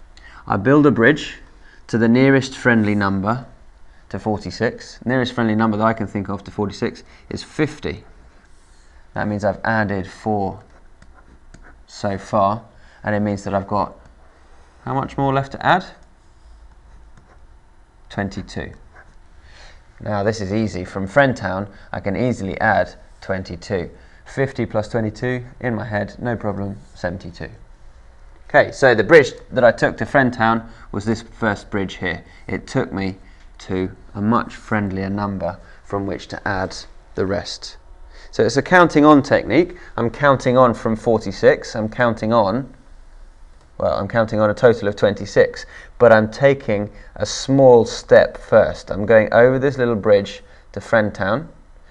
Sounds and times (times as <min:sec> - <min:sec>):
Speech: 0:00.4 - 0:08.2, 0:09.2 - 0:10.8, 0:11.9 - 0:14.1, 0:14.8 - 0:16.0, 0:18.1 - 0:18.8, 0:20.0 - 0:27.6, 0:28.5 - 0:42.8, 0:43.8 - 0:51.6.